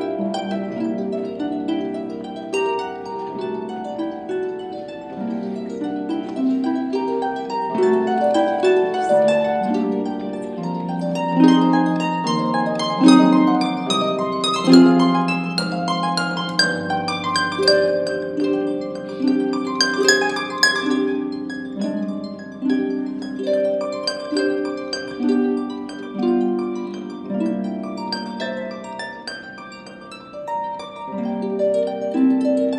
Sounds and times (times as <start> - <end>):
Harp: 0.0 - 32.7
Plucked string instrument: 0.0 - 32.7.